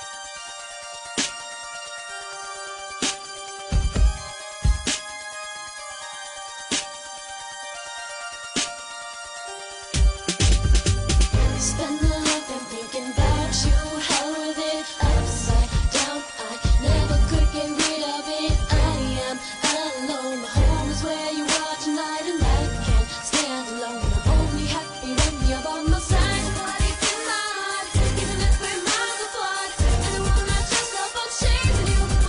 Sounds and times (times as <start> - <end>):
Soundtrack music: 0.0 - 32.2.